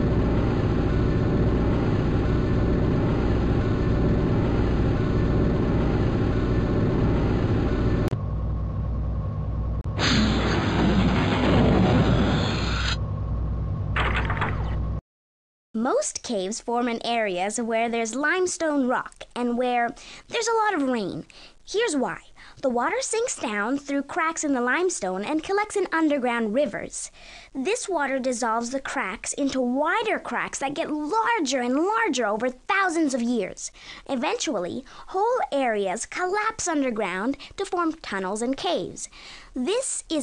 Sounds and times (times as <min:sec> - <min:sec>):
Speech: 0:15.8 - 0:40.2.